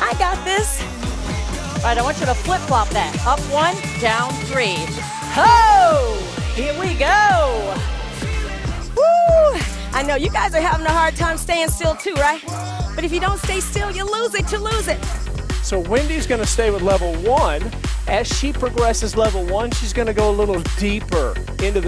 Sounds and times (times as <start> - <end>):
Music: 0.0 - 21.8.